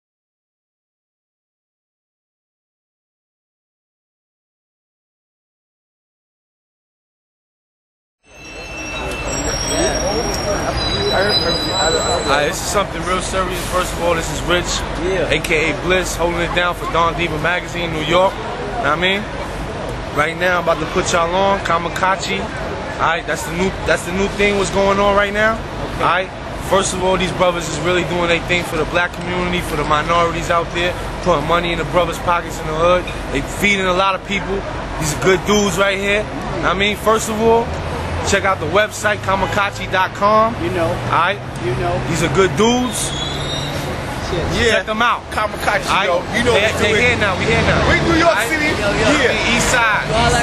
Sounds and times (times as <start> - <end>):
Speech: 9.4 - 19.4, 20.2 - 43.1, 44.2 - 50.4.